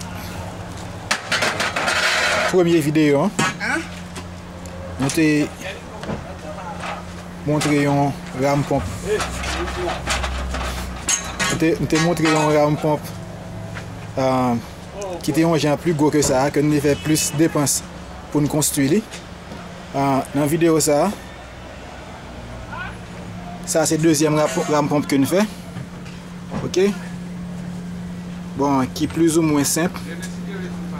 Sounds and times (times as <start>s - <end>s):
Speech: 5.0s - 10.0s, 11.5s - 13.1s, 14.2s - 17.8s, 23.7s - 25.5s, 26.6s - 27.1s, 28.6s - 30.9s.